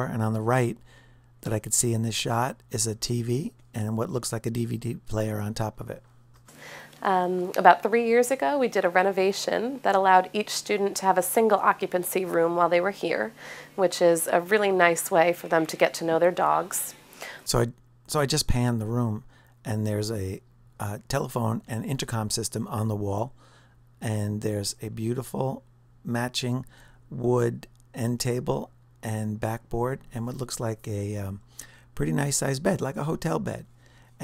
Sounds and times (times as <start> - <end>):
Narration, monologue: 0.0 - 34.2.